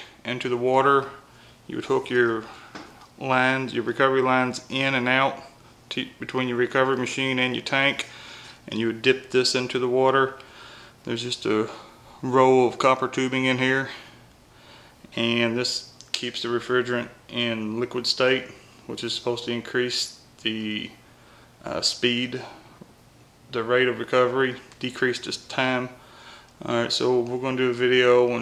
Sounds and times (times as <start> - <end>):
Speech: 0.2 - 2.5, 3.2 - 8.1, 8.7 - 10.4, 11.1 - 14.1, 15.1 - 21.0, 21.6 - 22.7, 23.5 - 26.0, 26.6 - 28.4.